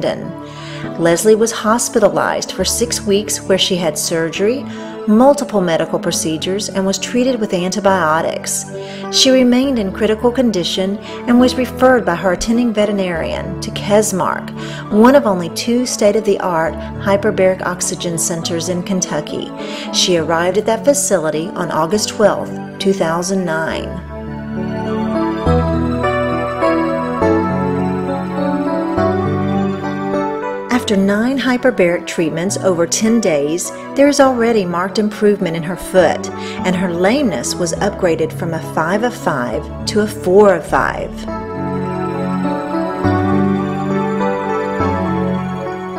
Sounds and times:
Speech: 0.0 - 24.0, 30.7 - 41.3
Music: 0.0 - 45.9.

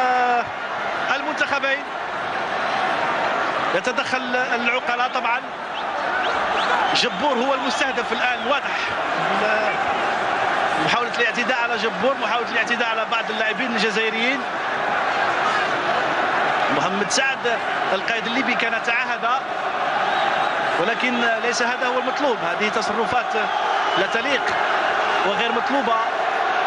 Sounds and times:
Speech: 0.0 - 0.5, 1.1 - 1.9, 3.8 - 5.5, 6.9 - 9.8, 10.8 - 14.5, 16.7 - 19.4, 20.8 - 24.6, 25.2 - 26.1.

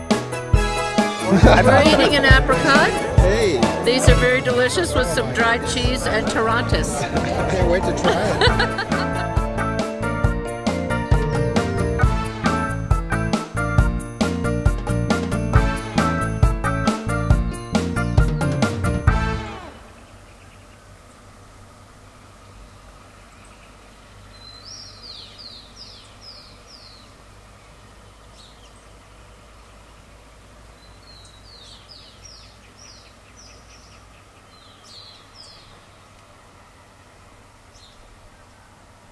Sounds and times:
Music: 0.0 - 19.8
Outside, rural or natural: 0.0 - 39.1.

